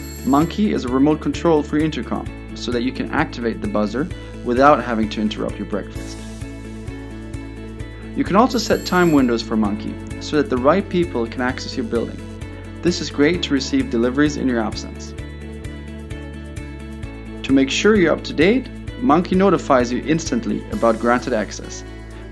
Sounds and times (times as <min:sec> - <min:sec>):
Music: 0:00.0 - 0:22.3
Speech: 0:00.2 - 0:06.2, 0:08.2 - 0:12.2, 0:12.8 - 0:15.1, 0:17.4 - 0:21.8.